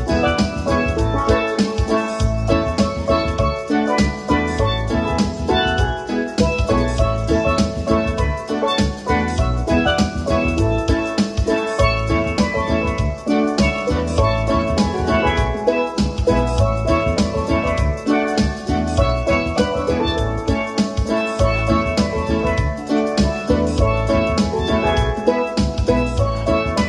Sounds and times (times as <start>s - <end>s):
Steelpan: 0.0s - 26.8s.